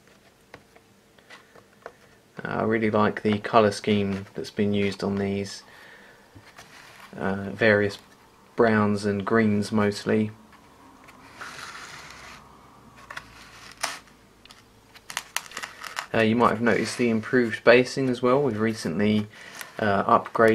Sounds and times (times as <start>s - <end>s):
Inside, small room: 0.0s - 20.5s
Speech: 2.4s - 5.6s, 7.1s - 10.4s, 16.1s - 20.5s.